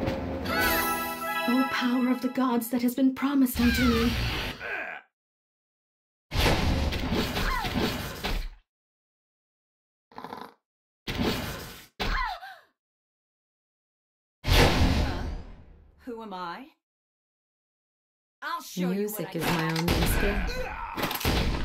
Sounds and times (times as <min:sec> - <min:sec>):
Music: 0:00.0 - 0:02.7
Speech: 0:01.5 - 0:04.1, 0:18.4 - 0:21.0.